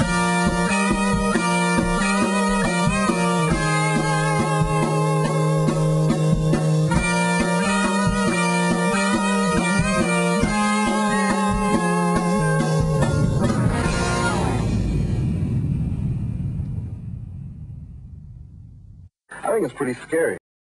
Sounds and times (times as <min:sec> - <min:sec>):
Music: 0:00.0 - 0:15.3
Speech: 0:19.3 - 0:20.4.